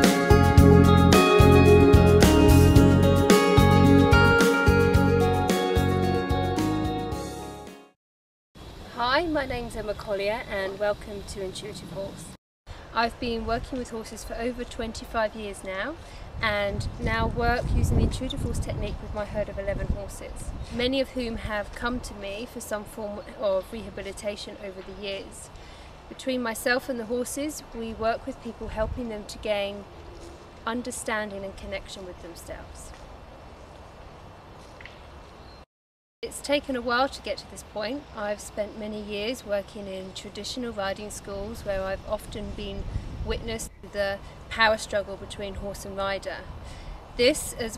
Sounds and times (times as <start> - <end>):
Music: 0.0 - 8.0
Speech: 8.9 - 12.4, 13.0 - 25.5, 26.1 - 29.8, 30.7 - 32.9, 36.2 - 46.5, 47.2 - 47.7.